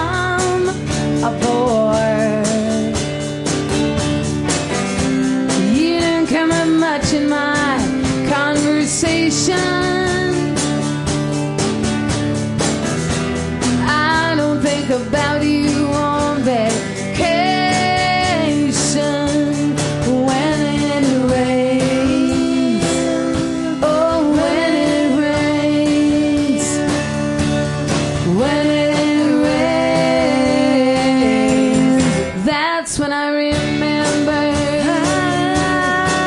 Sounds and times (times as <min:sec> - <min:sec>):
Music: 0:00.0 - 0:36.2.